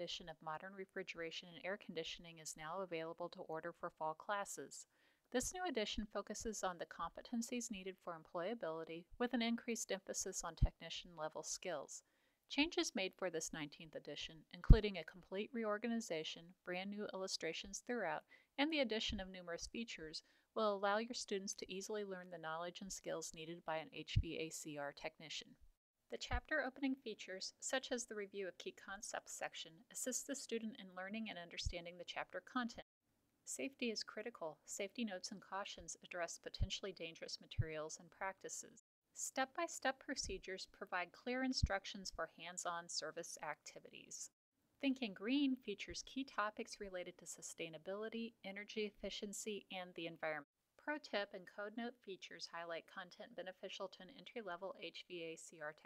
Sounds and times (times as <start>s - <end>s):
Speech: 0.0s - 32.9s, 33.5s - 55.8s.